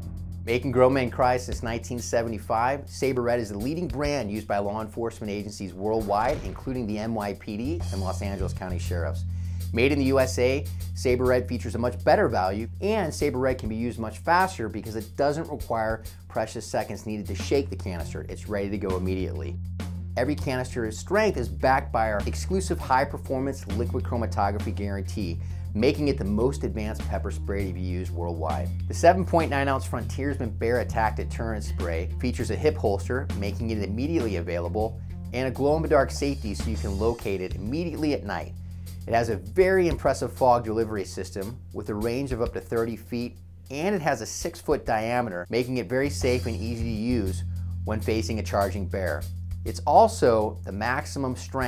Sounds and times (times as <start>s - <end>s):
Music: 0.0s - 51.6s
Speech: 0.5s - 19.6s, 20.2s - 51.6s.